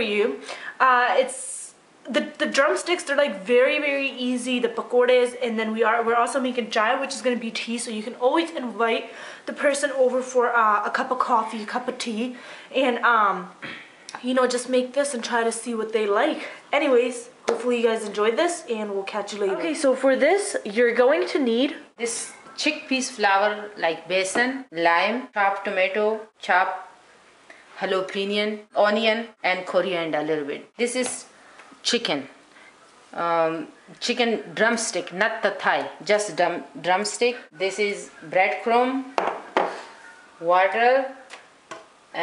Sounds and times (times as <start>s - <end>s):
Speech: 0.0s - 26.9s, 27.8s - 32.4s, 33.1s - 39.1s, 40.4s - 41.3s.